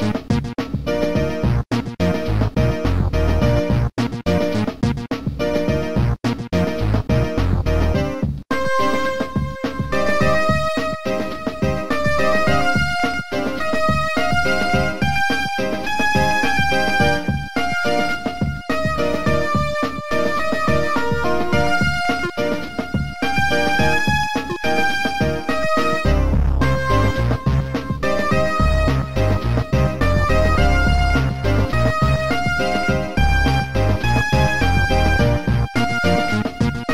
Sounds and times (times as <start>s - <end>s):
Music: 0.0s - 36.9s.